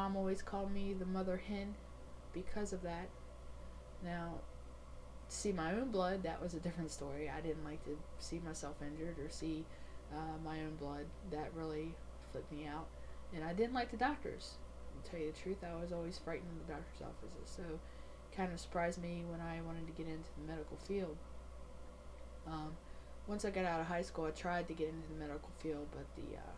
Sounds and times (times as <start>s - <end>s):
Female speech, woman speaking: 0.0s - 1.8s, 2.4s - 3.1s, 4.0s - 4.5s, 5.3s - 17.8s, 18.4s - 21.2s, 22.5s - 26.5s.